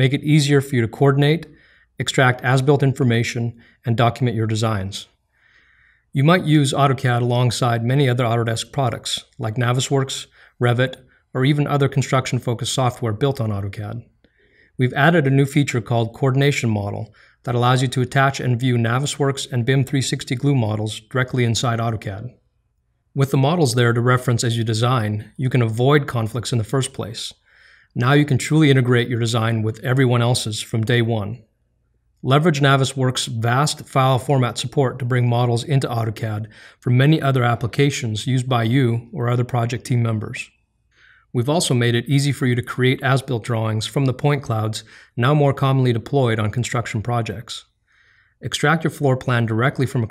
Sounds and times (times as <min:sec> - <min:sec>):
Speech: 0:00.0 - 0:05.2, 0:06.1 - 0:14.1, 0:14.8 - 0:22.4, 0:23.2 - 0:31.4, 0:32.2 - 0:40.6, 0:41.3 - 0:47.7, 0:48.4 - 0:50.1.